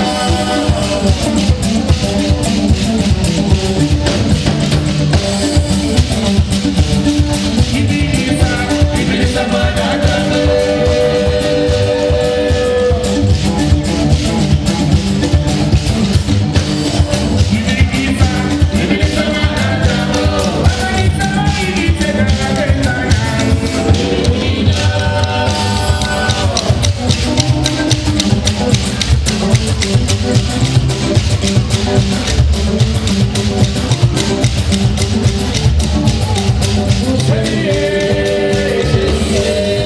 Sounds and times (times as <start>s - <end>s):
Music: 0.0s - 39.8s.